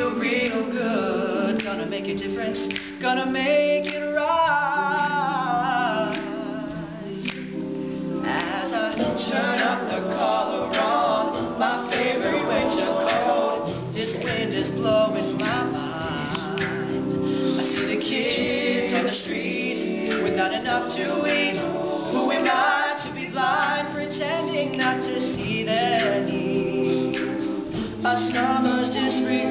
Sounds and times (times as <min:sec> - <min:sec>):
Music: 0:00.0 - 0:29.5.